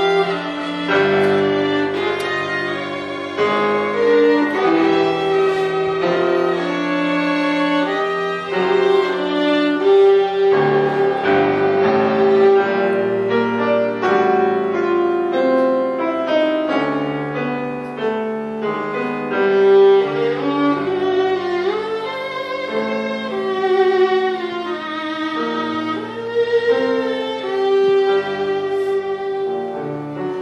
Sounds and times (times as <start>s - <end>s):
Violin, fiddle: 0.0s - 30.4s.